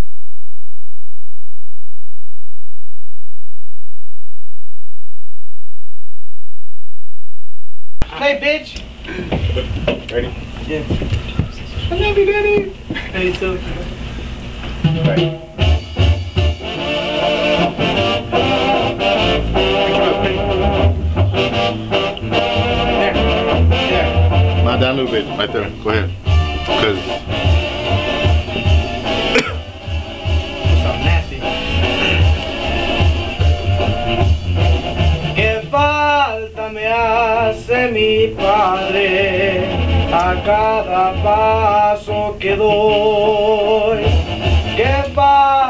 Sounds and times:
Speech: 0:08.1 - 0:08.9, 0:09.5 - 0:13.9, 0:23.9 - 0:27.2, 0:30.8 - 0:31.5
Music: 0:14.7 - 0:45.6
Male singing: 0:35.4 - 0:45.6.

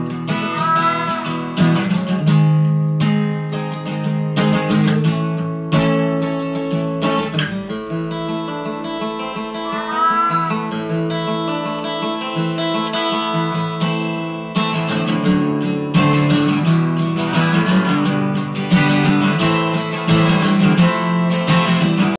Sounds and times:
Music: 0:00.0 - 0:22.1.

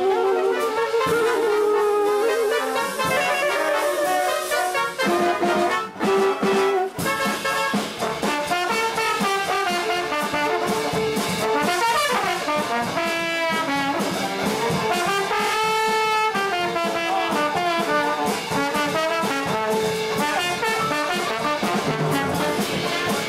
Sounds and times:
Trombone: 0:00.0 - 0:23.2.

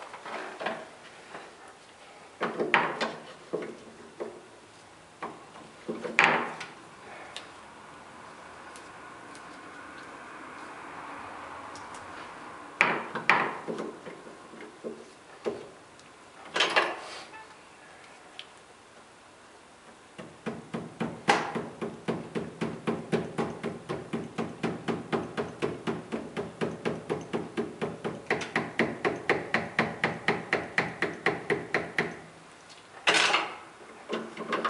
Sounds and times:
Hammer: 0:20.2 - 0:32.2.

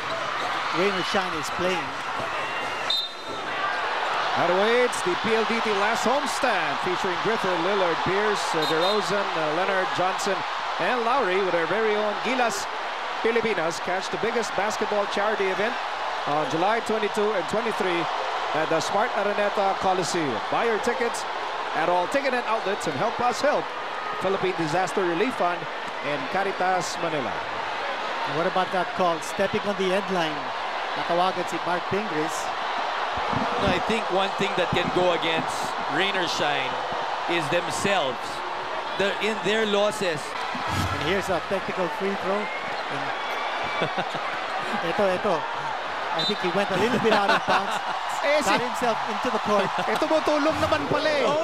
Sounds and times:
Speech: 0:00.8 - 0:02.0, 0:04.4 - 0:12.7, 0:13.3 - 0:21.2, 0:21.8 - 0:27.4, 0:28.3 - 0:30.4, 0:31.0 - 0:32.5, 0:33.5 - 0:36.7, 0:37.3 - 0:38.4, 0:39.0 - 0:42.5, 0:46.2 - 0:51.4.

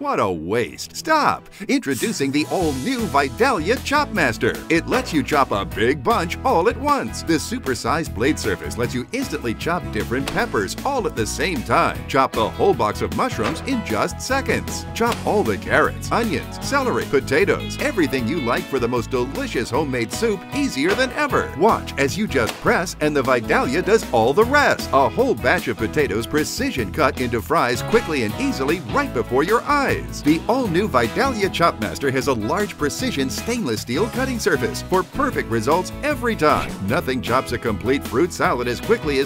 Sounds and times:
Music: 0:00.0 - 0:39.2
Speech: 0:00.0 - 0:39.2.

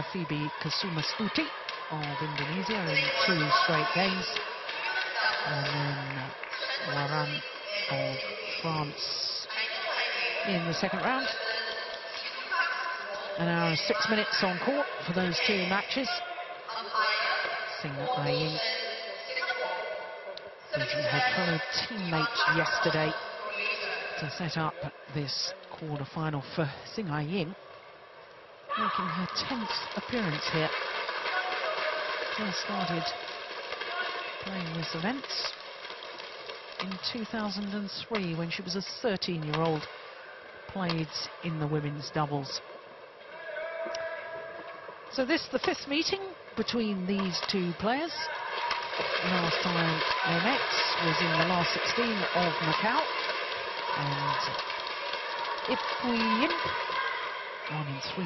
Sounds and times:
Speech: 0:00.0 - 0:20.0, 0:20.7 - 0:27.6, 0:28.7 - 0:30.7, 0:31.4 - 0:33.2, 0:34.4 - 0:35.5, 0:36.8 - 0:39.9, 0:40.7 - 0:42.6, 0:45.2 - 0:48.3, 0:49.2 - 0:53.1, 0:54.0 - 0:54.6, 0:55.7 - 0:56.7.

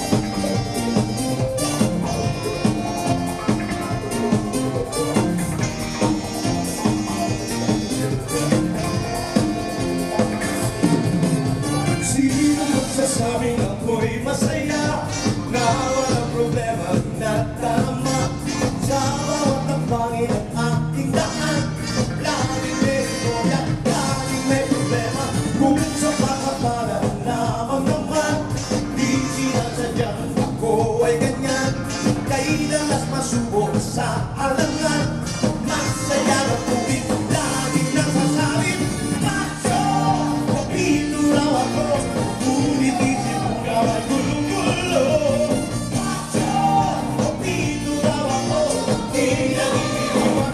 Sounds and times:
Dance music: 0:00.0 - 0:50.5
Jazz: 0:00.0 - 0:50.5.

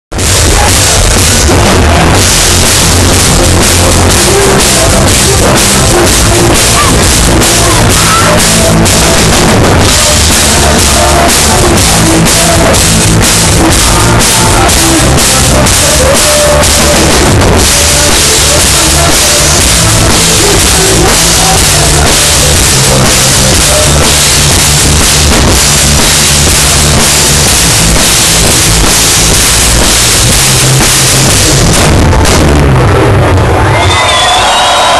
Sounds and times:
Singing: 0:00.2 - 0:28.8.

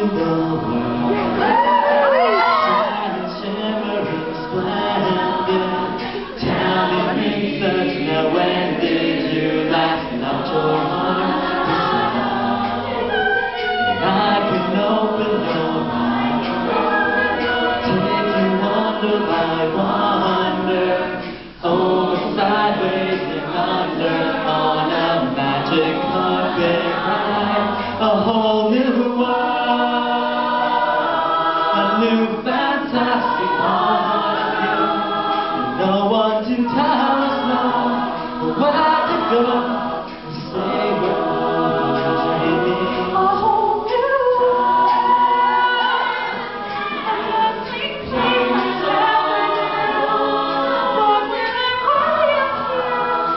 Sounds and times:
Choir: 0:00.0 - 0:53.3
Vocal music: 0:00.0 - 0:53.3.

